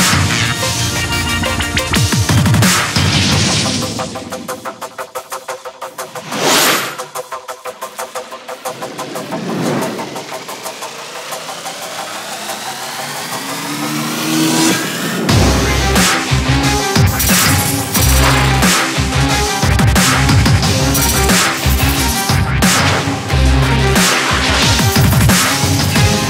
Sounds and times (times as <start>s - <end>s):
Music: 0.0s - 26.3s.